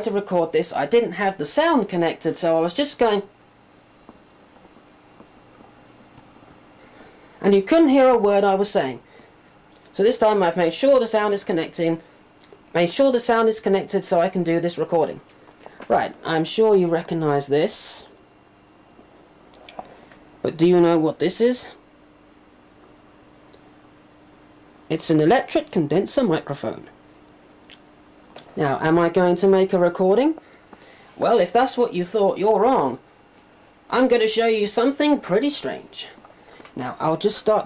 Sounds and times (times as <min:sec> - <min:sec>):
Speech: 0:00.0 - 0:03.3, 0:07.4 - 0:09.0, 0:09.9 - 0:12.0, 0:12.7 - 0:15.3, 0:15.9 - 0:18.1, 0:20.4 - 0:21.8, 0:24.9 - 0:27.0, 0:28.6 - 0:30.4, 0:31.2 - 0:33.0, 0:33.9 - 0:36.2, 0:36.8 - 0:37.6.